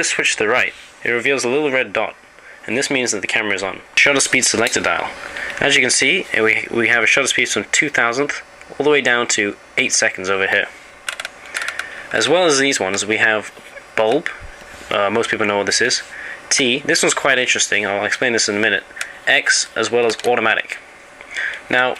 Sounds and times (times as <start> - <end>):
Speech: 0.0 - 10.8, 12.1 - 20.8, 21.6 - 21.9.